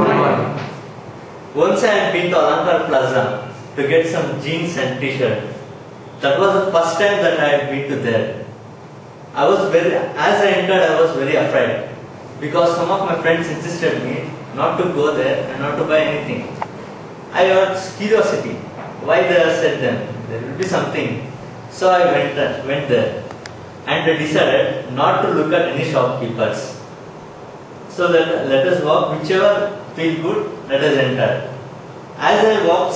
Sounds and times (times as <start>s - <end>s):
Male speech, man speaking: 1.6s - 5.6s, 6.2s - 8.5s, 9.4s - 16.6s, 17.3s - 23.3s, 23.9s - 26.8s, 27.9s - 31.6s, 32.2s - 32.9s.